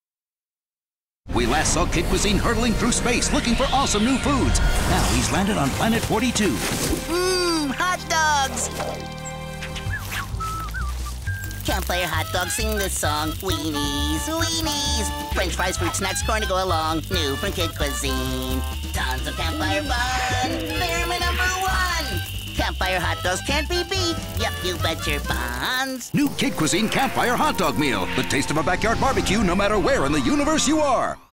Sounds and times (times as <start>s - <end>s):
Speech: 1.3s - 8.7s, 11.7s - 18.6s, 20.7s - 31.3s
Music: 1.4s - 31.3s.